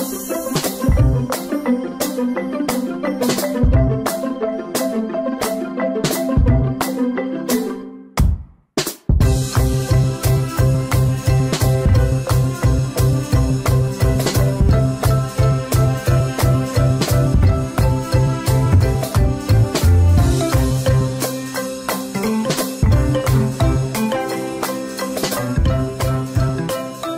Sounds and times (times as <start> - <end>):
Music: 0.0 - 27.1.